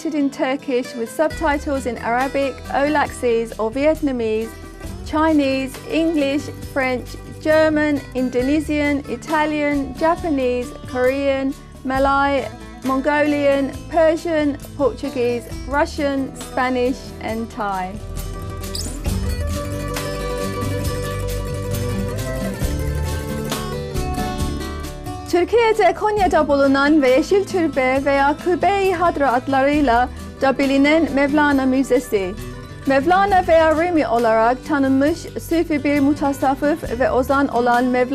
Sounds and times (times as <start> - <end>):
Speech: 0.0 - 4.5, 5.1 - 18.0, 25.3 - 38.1
Music: 0.0 - 38.1.